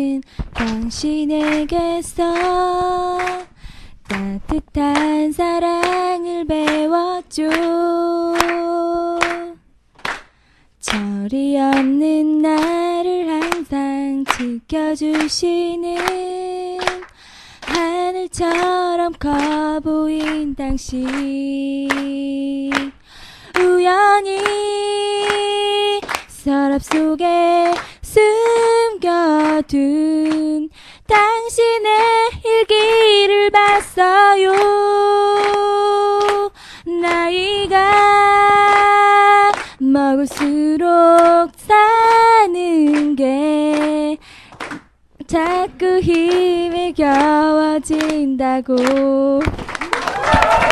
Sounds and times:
Female singing: 0.0 - 9.6, 10.8 - 44.2, 45.2 - 49.6.

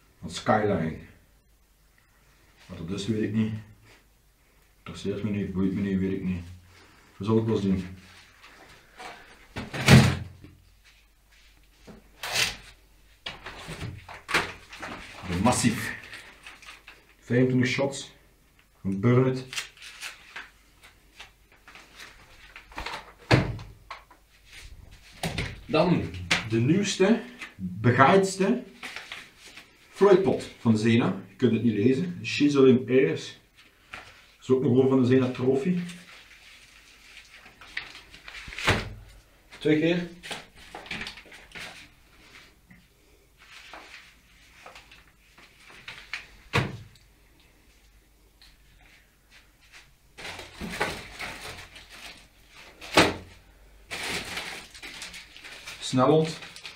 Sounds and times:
Speech: 0.2 - 1.2, 2.7 - 3.8, 4.8 - 6.6, 7.2 - 8.0, 15.2 - 16.1, 17.2 - 18.2, 18.8 - 19.6, 25.7 - 28.8, 30.0 - 33.4, 34.4 - 36.1, 39.6 - 40.2, 55.8 - 56.6.

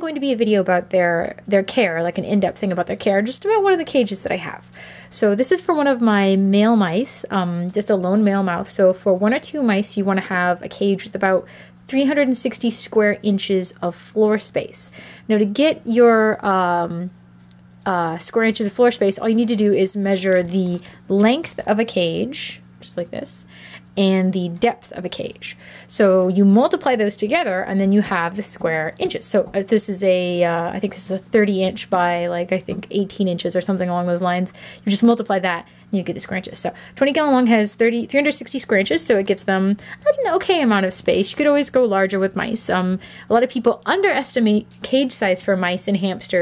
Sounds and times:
Speech: 0.0 - 17.2, 17.8 - 46.4.

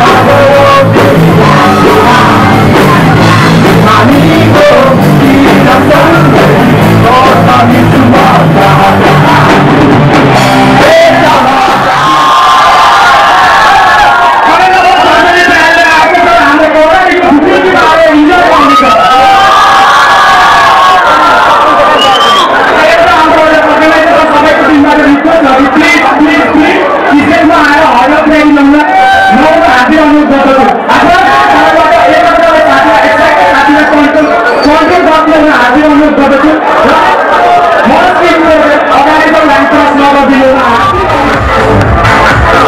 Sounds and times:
Cheering: 0.0 - 42.6
Crowd: 0.0 - 42.6.

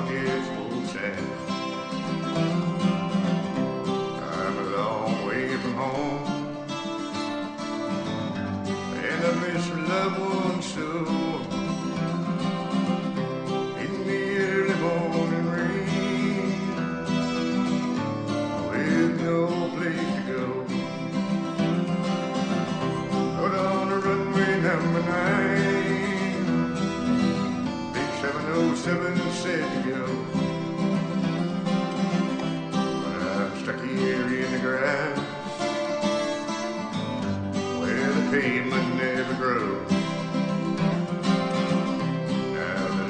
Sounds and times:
Music: 0.0 - 43.0.

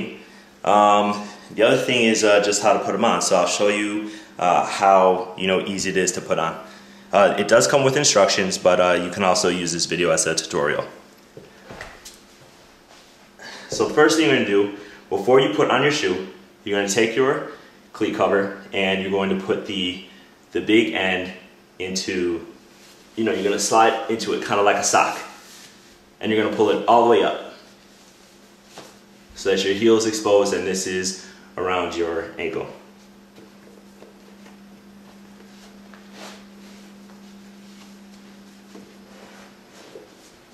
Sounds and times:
Speech: 0.0 - 11.0, 13.8 - 22.6, 23.2 - 25.4, 26.2 - 27.6, 29.4 - 32.8.

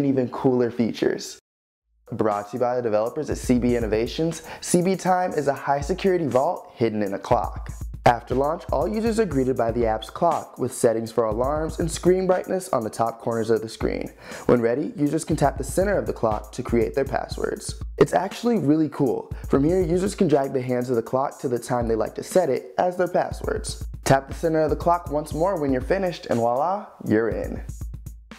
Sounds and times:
Speech: 0.0 - 1.4, 2.1 - 27.7
Music: 2.1 - 28.3.

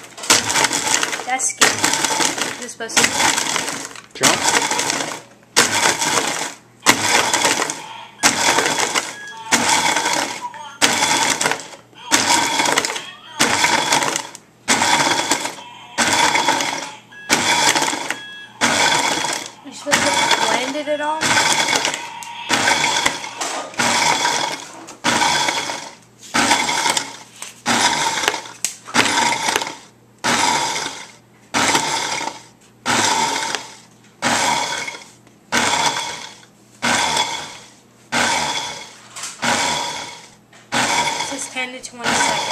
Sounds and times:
Blender: 0.0 - 42.5.

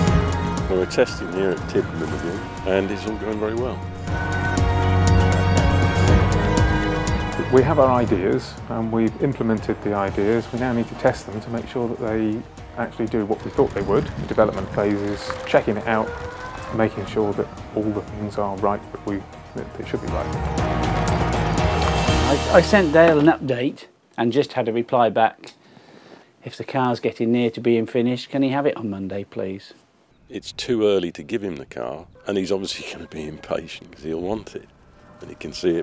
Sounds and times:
Music: 0.0 - 23.4
Speech: 0.7 - 3.8, 7.4 - 16.1, 16.7 - 20.3, 22.3 - 25.6, 26.4 - 35.8.

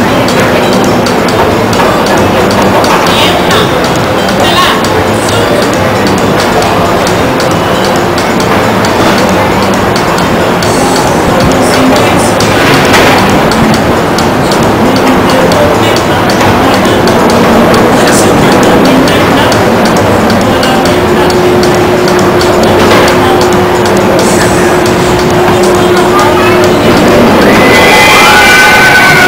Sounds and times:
Speech: 0.0 - 13.8, 14.4 - 27.8
Music: 0.0 - 29.2.

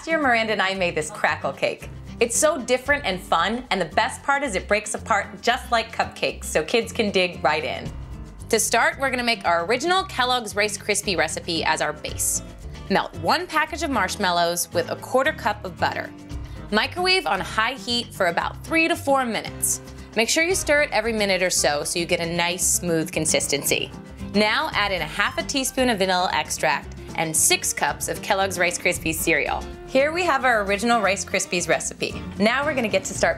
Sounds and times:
Speech: 0.0 - 7.9, 8.5 - 16.1, 16.7 - 33.3
Music: 0.0 - 33.3.

